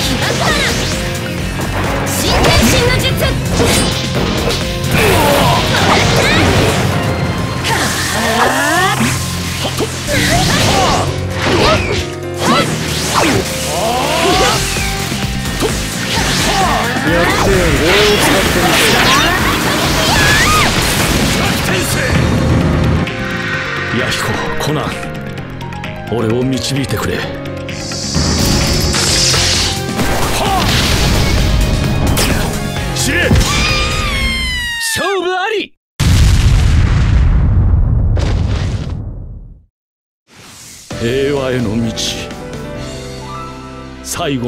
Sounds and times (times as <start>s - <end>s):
Music: 0.0s - 34.8s, 40.4s - 44.4s
Speech: 34.9s - 35.8s, 41.0s - 42.3s
Boom: 36.0s - 39.6s.